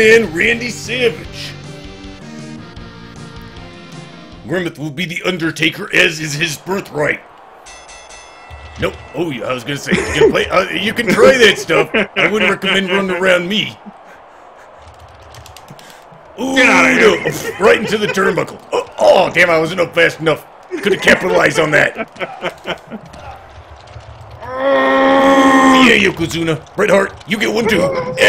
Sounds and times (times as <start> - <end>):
Speech: 0.0 - 1.6, 4.4 - 7.2, 8.8 - 13.8, 16.4 - 22.0, 25.2 - 28.2.